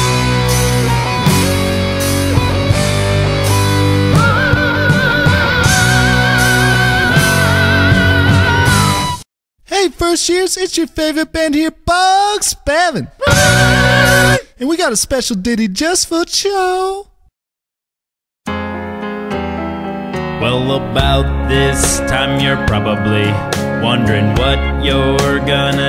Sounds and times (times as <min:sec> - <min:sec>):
Progressive rock: 0:00.0 - 0:09.2, 0:13.2 - 0:14.4.